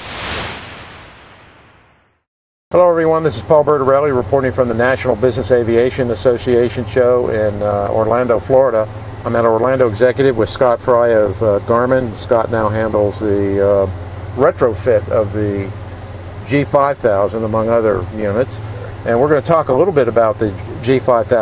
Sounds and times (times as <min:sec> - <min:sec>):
Vehicle: 0:02.8 - 0:21.4.